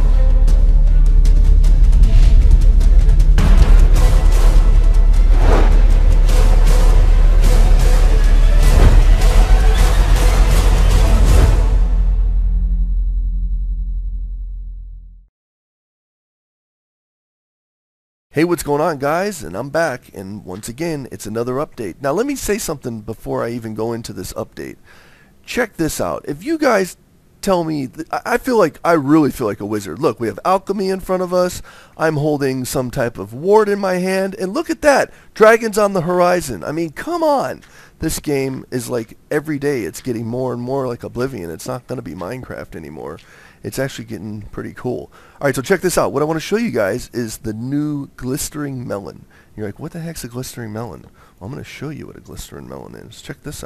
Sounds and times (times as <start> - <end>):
Speech: 18.4 - 24.8, 25.5 - 53.6.